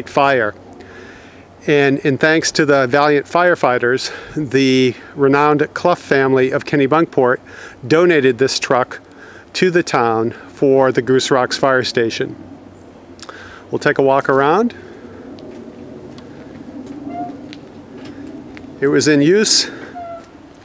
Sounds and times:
Speech: 0.0 - 0.6, 1.6 - 9.0, 9.6 - 12.4, 13.7 - 14.8, 18.8 - 19.8.

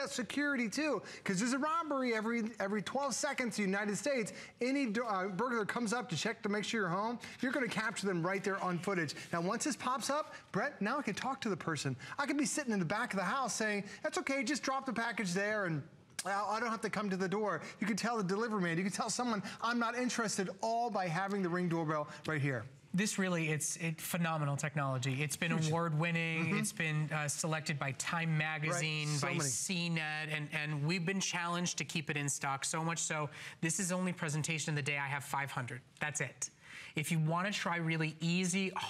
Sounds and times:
Speech: 0.0 - 38.8.

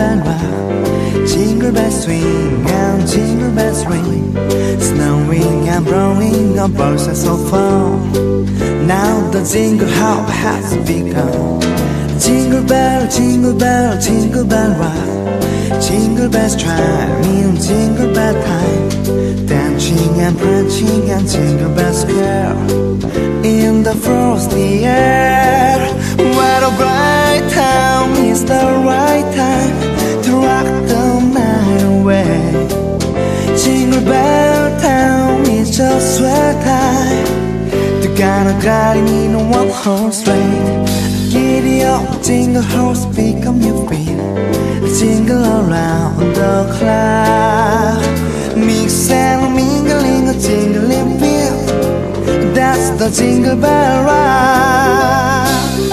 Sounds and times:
Music: 0.0 - 55.9.

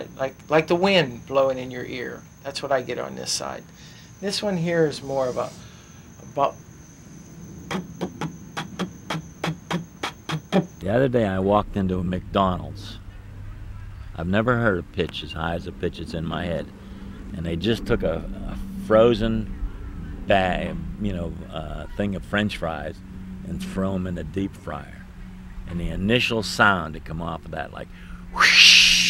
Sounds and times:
Speech: 0.0 - 3.6, 4.2 - 5.6, 6.3 - 6.6, 10.8 - 13.0, 14.2 - 16.7, 17.3 - 19.5, 20.2 - 25.0, 25.7 - 27.9.

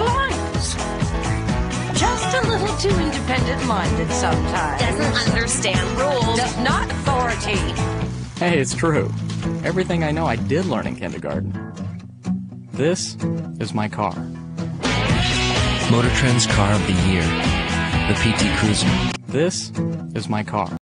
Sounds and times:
Music: 0.0 - 20.8
Speech: 4.7 - 7.7, 9.7 - 11.4, 12.8 - 14.2, 15.9 - 17.3, 18.1 - 20.8.

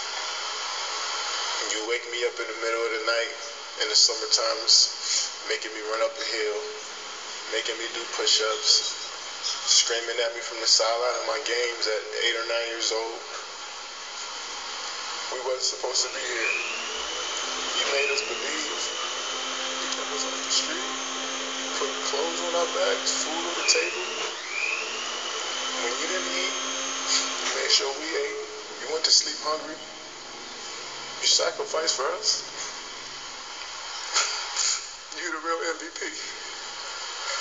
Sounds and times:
Speech: 1.6 - 6.9, 7.5 - 13.4, 15.3 - 16.8, 17.7 - 19.0, 19.8 - 21.0, 21.7 - 24.3, 25.7 - 29.9, 31.2 - 32.5, 35.1 - 36.5.

